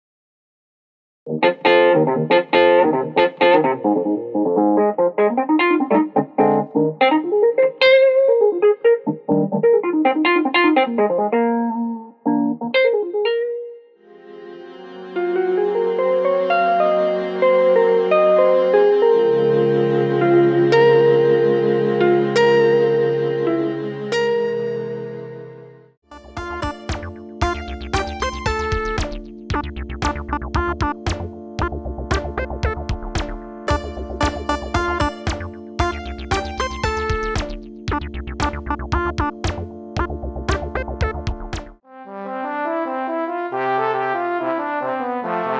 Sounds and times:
Electric piano: 1.3 - 13.8, 14.8 - 41.8.

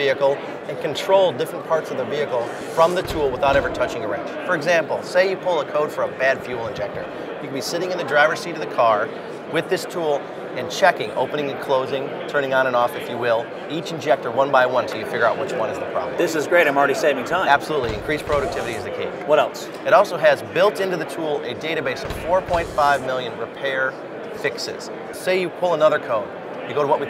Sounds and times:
Speech: 0.0 - 27.0.

